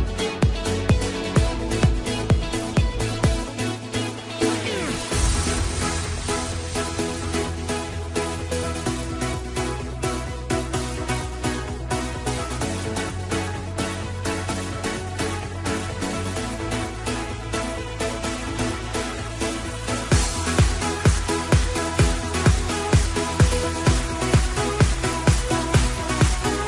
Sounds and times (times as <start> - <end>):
Music: 0.0 - 26.6.